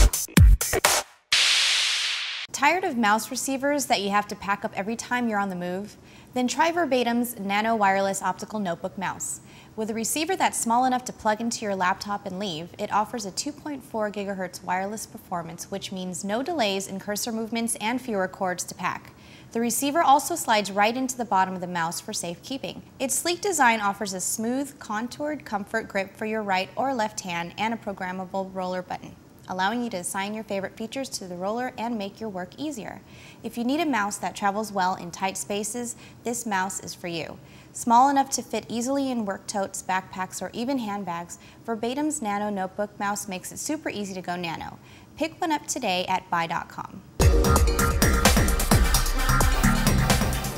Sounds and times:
Speech: 2.5 - 47.0.

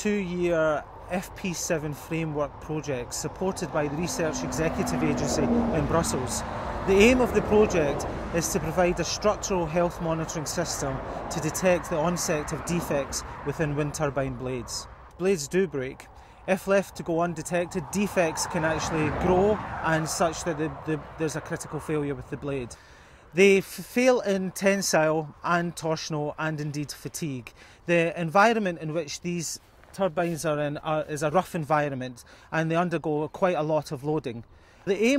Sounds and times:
Speech: 0.0 - 22.8, 23.4 - 35.1.

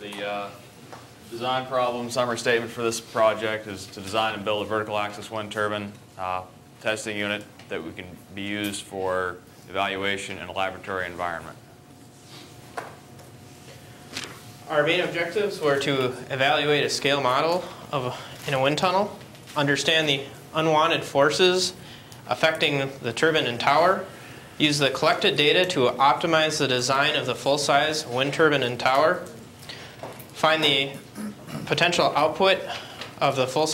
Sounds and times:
Speech: 0.0 - 0.6, 1.3 - 11.6, 14.6 - 29.4, 30.4 - 33.7.

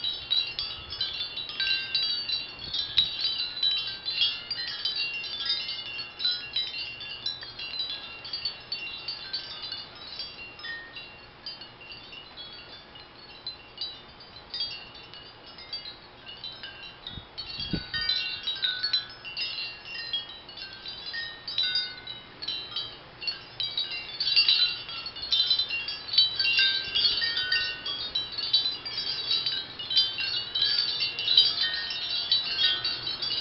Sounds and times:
Wind chime: 0.0 - 33.4.

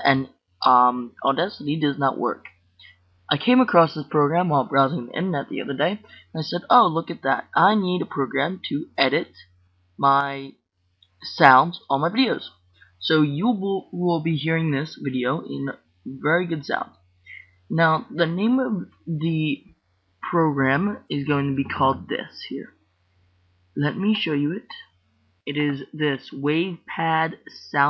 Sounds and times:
Speech: 0.0 - 2.5, 3.3 - 9.4, 10.0 - 10.5, 11.2 - 22.7, 23.8 - 24.8, 25.5 - 27.9.

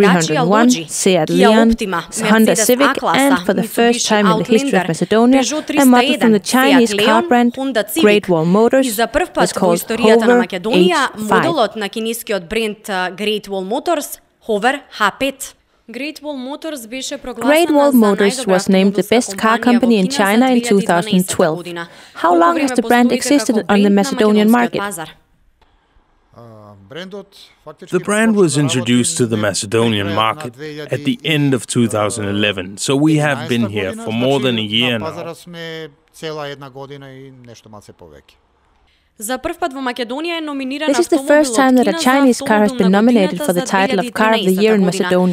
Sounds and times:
Speech: 0.0 - 25.1, 26.4 - 38.4, 39.2 - 45.3.

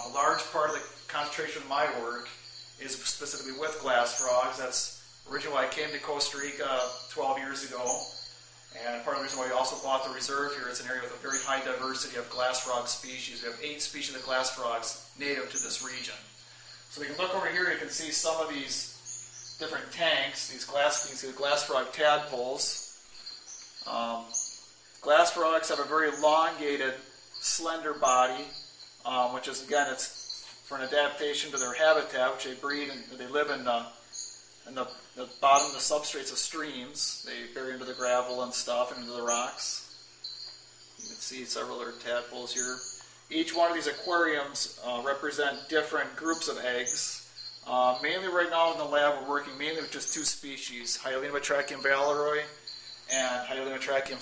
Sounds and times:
Speech: 0.0 - 16.3, 16.9 - 19.0, 19.6 - 22.8, 23.9 - 24.4, 25.0 - 34.0, 34.7 - 39.9, 41.0 - 54.2.

